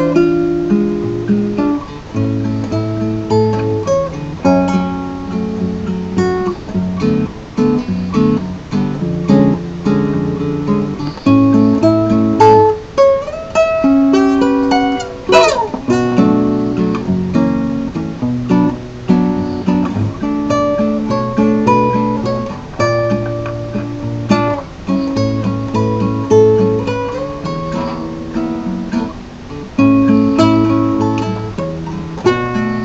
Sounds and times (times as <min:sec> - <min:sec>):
Guitar: 0:00.0 - 0:32.8.